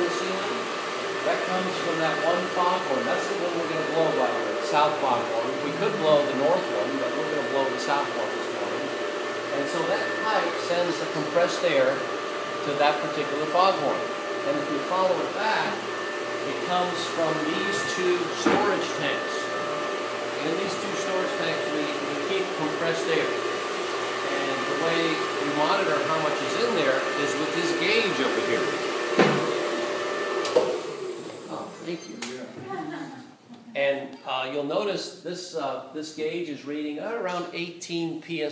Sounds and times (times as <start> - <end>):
Speech: 1.3 - 8.8, 9.5 - 12.0, 12.6 - 15.8, 16.5 - 19.4, 20.4 - 23.4, 24.3 - 28.8, 31.5 - 38.5.